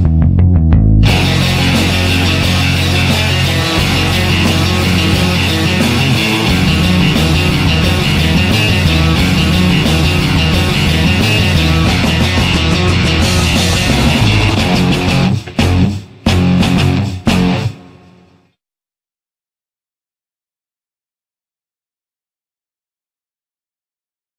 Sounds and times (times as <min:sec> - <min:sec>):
Guitar: 0:00.0 - 0:18.5.